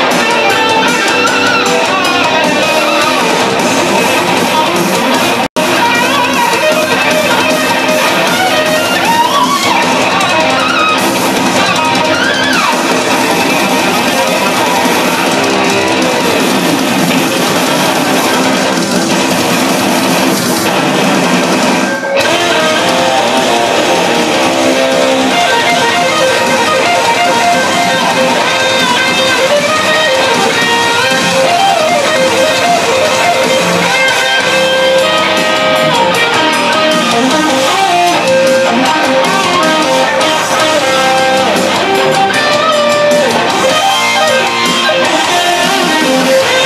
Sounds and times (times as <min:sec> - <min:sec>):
Theme music: 0:00.0 - 0:46.6.